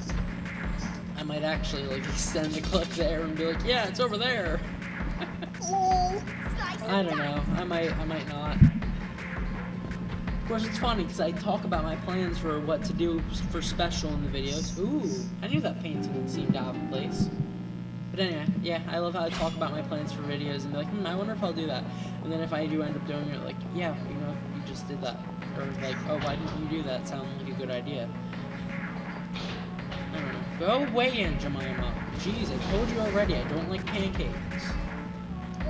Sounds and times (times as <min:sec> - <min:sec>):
Music: 0:00.0 - 0:35.7
Speech: 0:01.2 - 0:04.6, 0:05.6 - 0:08.7, 0:10.5 - 0:17.4, 0:18.2 - 0:28.1, 0:30.1 - 0:34.8.